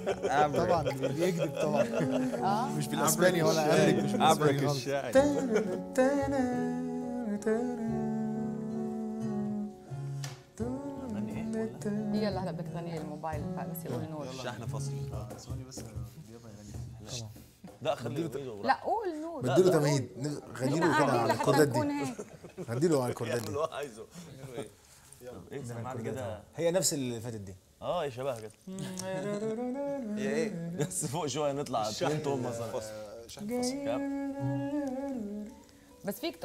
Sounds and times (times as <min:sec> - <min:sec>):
Singing: 0:00.0 - 0:09.8, 0:10.6 - 0:15.2, 0:28.7 - 0:31.1, 0:32.6 - 0:36.0.